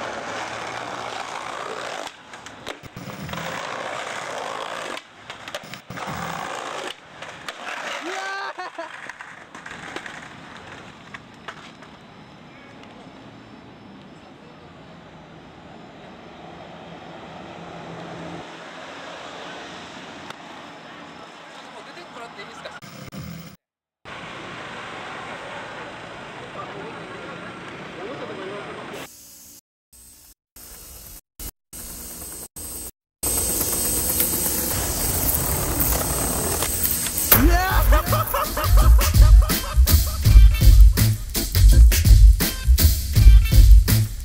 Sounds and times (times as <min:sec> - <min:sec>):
Speech: 0:20.8 - 0:22.8, 0:25.1 - 0:29.0.